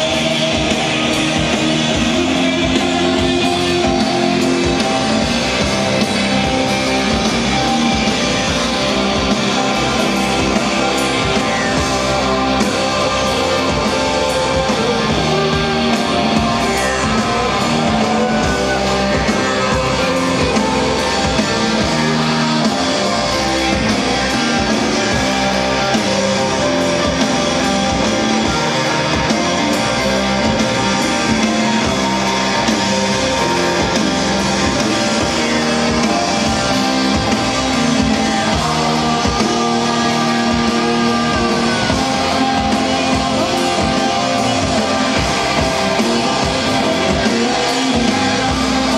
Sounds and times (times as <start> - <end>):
Music: 0.0 - 48.9.